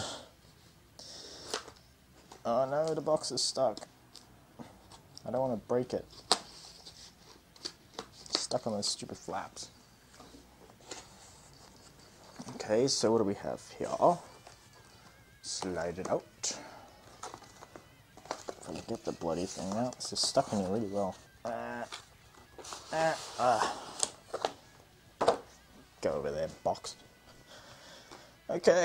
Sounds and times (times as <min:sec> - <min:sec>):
Inside, small room: 0:00.0 - 0:28.8
Speech: 0:02.4 - 0:03.8, 0:05.2 - 0:06.1, 0:08.4 - 0:09.7, 0:12.5 - 0:14.2, 0:15.4 - 0:16.6, 0:18.7 - 0:21.6, 0:26.0 - 0:27.0, 0:28.5 - 0:28.8.